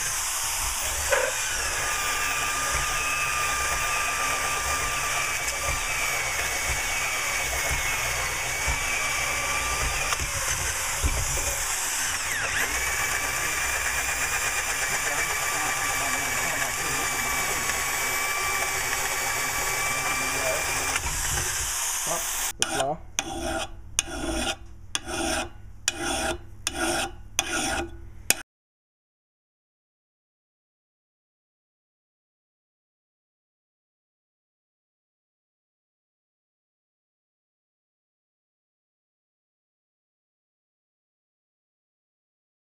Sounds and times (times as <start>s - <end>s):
Drill: 0.0s - 22.6s.